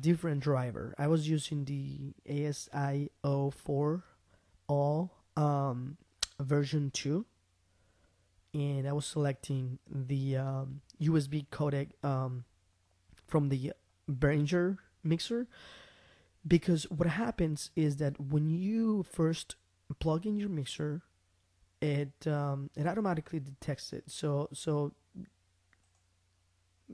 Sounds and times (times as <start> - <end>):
Narration, monologue: 0.0 - 26.9.